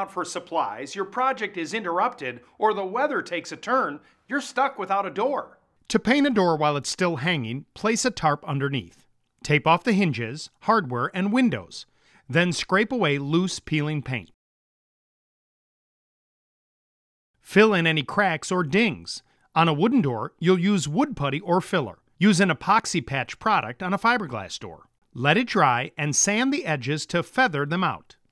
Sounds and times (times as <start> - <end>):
Speech: 0.0 - 14.4, 17.5 - 28.2.